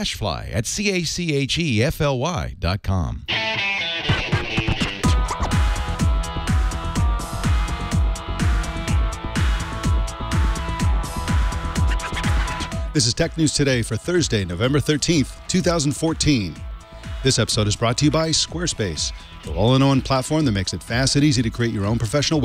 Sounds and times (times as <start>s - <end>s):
Speech: 0.0s - 3.3s, 13.0s - 16.6s, 17.2s - 22.4s
Soundtrack music: 3.3s - 22.4s.